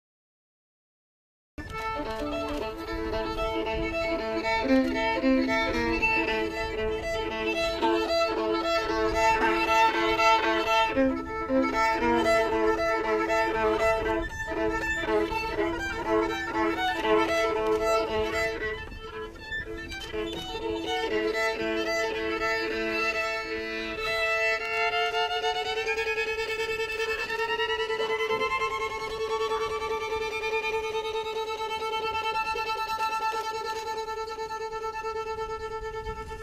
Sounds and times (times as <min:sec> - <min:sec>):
Violin, fiddle: 0:01.6 - 0:36.4.